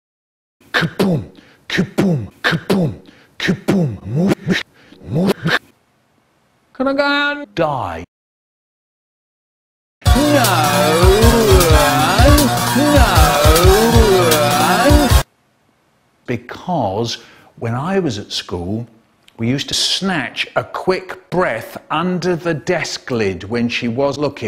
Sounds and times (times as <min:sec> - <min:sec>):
Speech: 0:06.8 - 0:08.1, 0:10.2 - 0:14.9, 0:16.3 - 0:24.4
Music: 0:10.0 - 0:15.2.